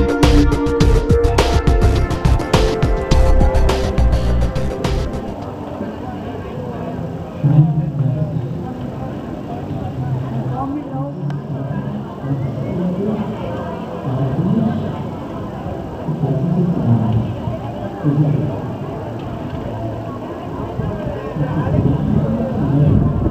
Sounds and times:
Crowd: 0.0s - 23.3s
Outside, urban or manmade: 0.0s - 23.3s
Speech: 5.4s - 23.3s.

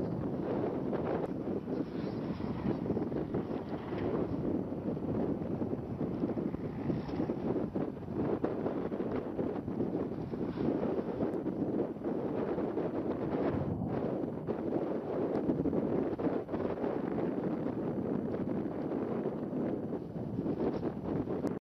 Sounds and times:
Eruption: 0.0s - 21.6s.

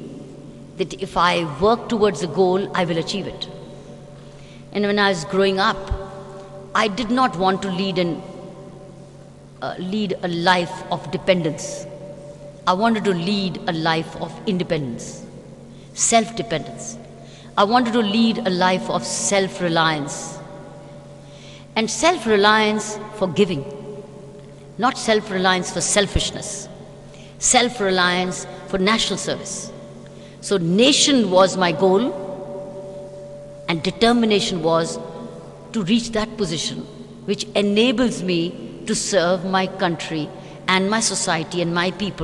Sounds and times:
Narration, monologue: 0.0s - 42.2s
Female speech, woman speaking: 0.8s - 3.6s, 4.7s - 6.0s, 6.8s - 8.3s, 9.6s - 11.9s, 12.7s - 15.3s, 16.0s - 17.0s, 17.6s - 20.4s, 21.8s - 23.7s, 24.8s - 26.7s, 27.4s - 29.8s, 30.4s - 32.2s, 33.7s - 35.0s, 35.7s - 42.2s.

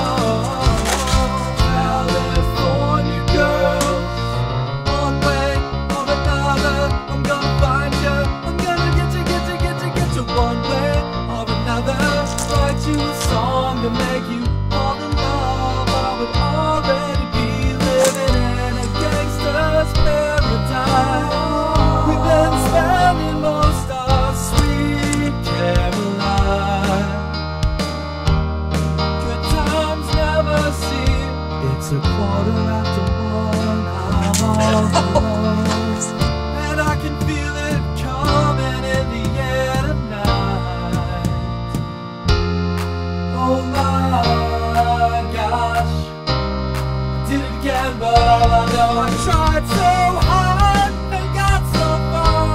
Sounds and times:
Music: 0.0s - 52.5s.

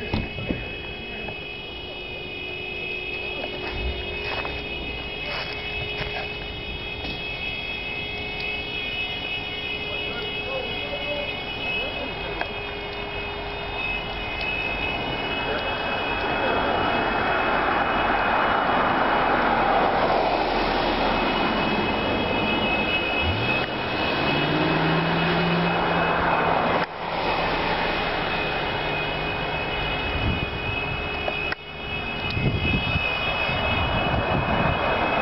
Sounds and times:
Car passing by: 16.4s - 29.8s, 33.2s - 35.2s.

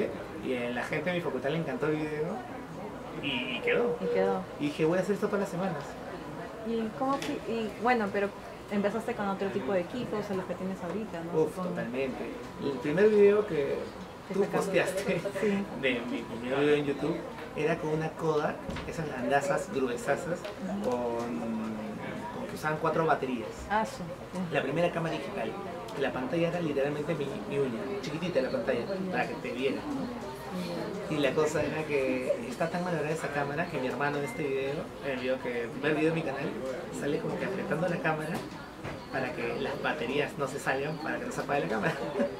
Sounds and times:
Conversation: 0.0s - 42.4s.

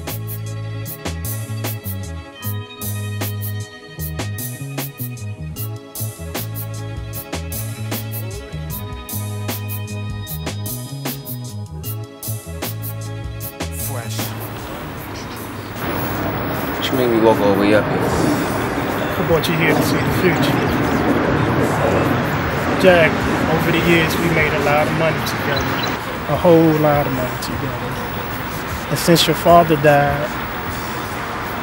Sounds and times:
Speech: 13.8s - 14.4s, 16.8s - 18.0s, 19.1s - 21.0s, 21.6s - 28.1s, 28.9s - 30.4s.

